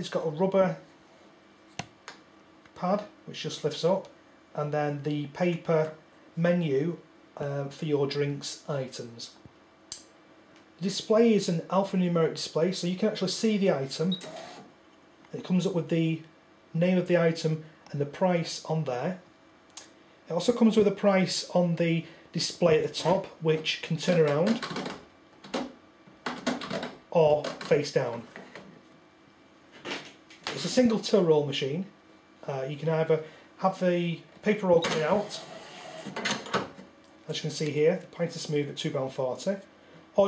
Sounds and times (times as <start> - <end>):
Speech: 0.0 - 0.8, 2.8 - 9.4, 10.8 - 14.2, 15.3 - 19.2, 20.3 - 24.6, 27.1 - 28.3, 30.5 - 35.5, 37.2 - 40.2
Cash register: 14.1 - 14.7, 34.8 - 36.6.